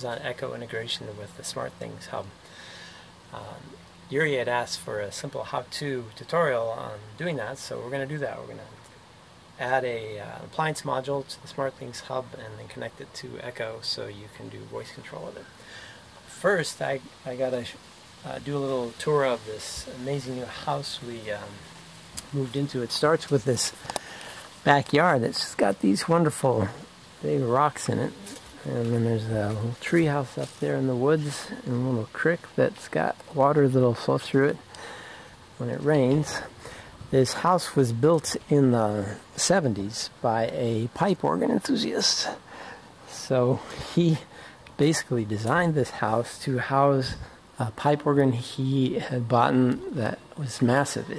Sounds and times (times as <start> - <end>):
Speech: 0.0 - 2.4, 3.3 - 8.9, 9.6 - 15.6, 16.3 - 23.8, 24.6 - 34.7, 35.6 - 36.5, 37.1 - 42.4, 43.0 - 51.1.